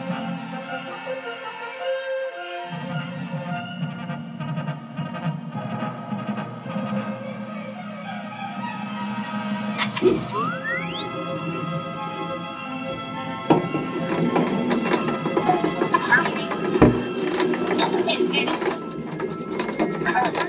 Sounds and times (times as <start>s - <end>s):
Music: 0.0s - 20.4s.